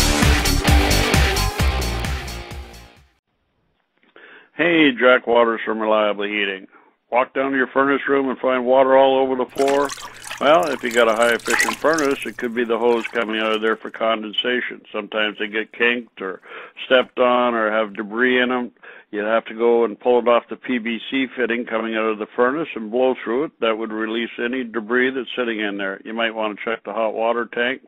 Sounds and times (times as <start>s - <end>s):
Speech: 4.5s - 27.8s.